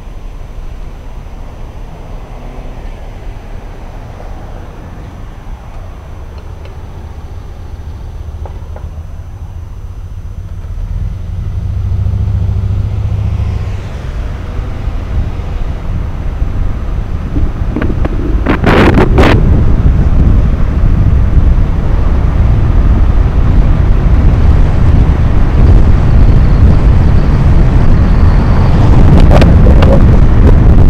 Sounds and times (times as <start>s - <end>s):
Car: 0.0s - 30.9s
Outside, urban or manmade: 0.0s - 30.9s.